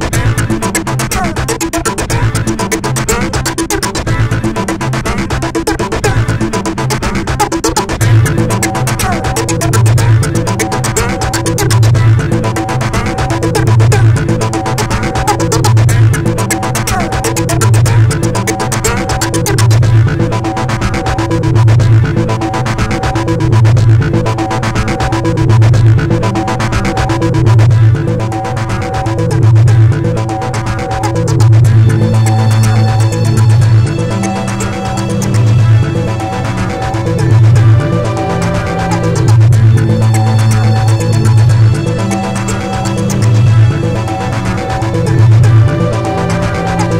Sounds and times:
Techno: 0.0 - 46.9
Trance music: 0.0 - 46.9.

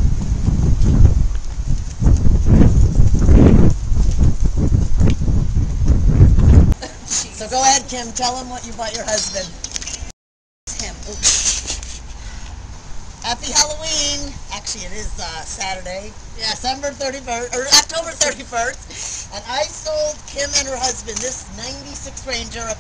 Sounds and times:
Speech: 7.3 - 9.6, 10.7 - 11.3, 13.2 - 22.8.

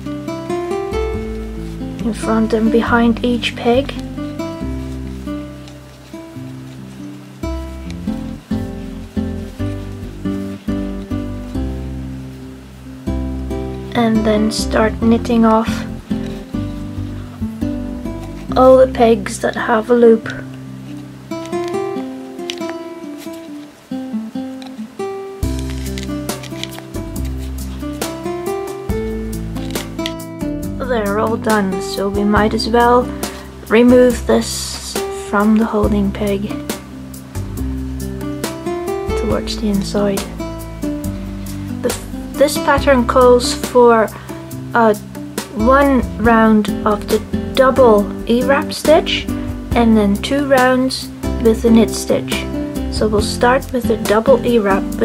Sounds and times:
Music: 0.0 - 55.0
Speech: 2.0 - 4.0, 13.9 - 15.9, 18.5 - 20.4, 30.8 - 33.1, 33.7 - 36.6, 39.2 - 40.3, 41.8 - 44.2, 44.8 - 55.0.

